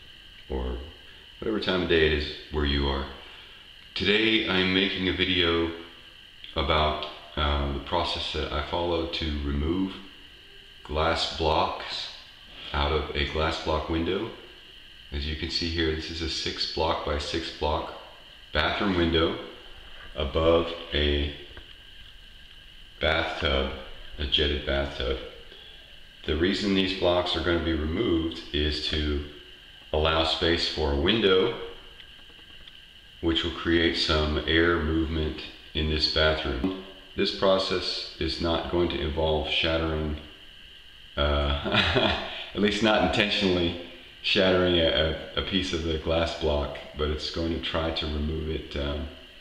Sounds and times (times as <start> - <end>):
Speech: 0.5 - 3.2, 4.0 - 5.9, 6.5 - 10.1, 10.8 - 14.4, 15.1 - 19.6, 20.2 - 21.5, 23.0 - 25.4, 26.3 - 29.4, 30.0 - 31.8, 33.2 - 40.3, 41.2 - 49.2.